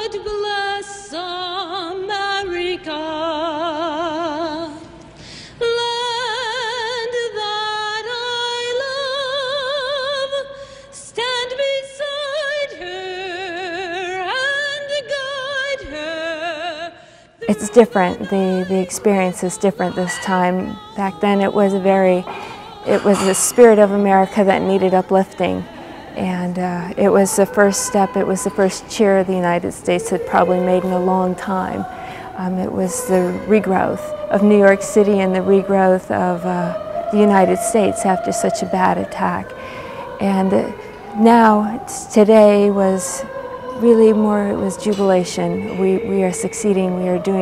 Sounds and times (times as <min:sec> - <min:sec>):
Speech: 0:17.4 - 0:39.6, 0:40.2 - 0:47.4.